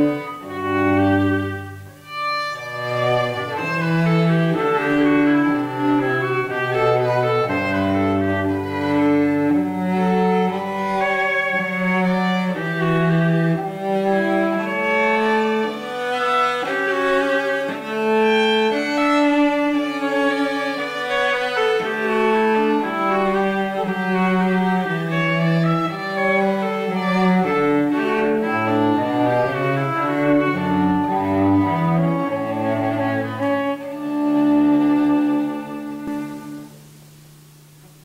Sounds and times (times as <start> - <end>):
Violin, fiddle: 0.0 - 36.8
Cello: 0.0 - 38.0.